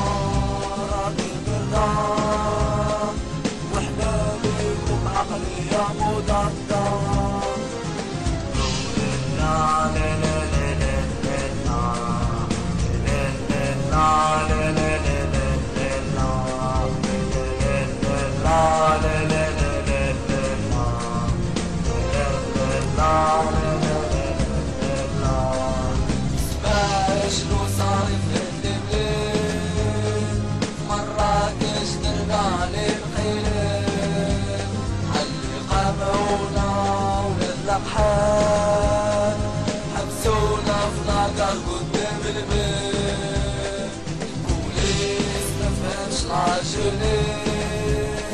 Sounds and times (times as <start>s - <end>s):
Music: 0.0s - 48.3s.